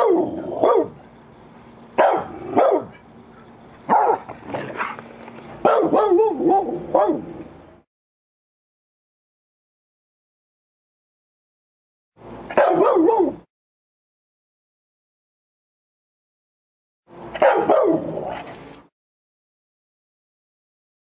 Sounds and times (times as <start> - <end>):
Bow-wow: 0.0 - 1.0, 2.0 - 3.0, 3.9 - 5.0, 5.6 - 7.2, 12.5 - 13.4, 17.4 - 18.5
Yip: 0.0 - 1.0, 2.0 - 3.0, 3.9 - 4.3, 5.6 - 7.2, 12.5 - 13.4, 17.4 - 18.0.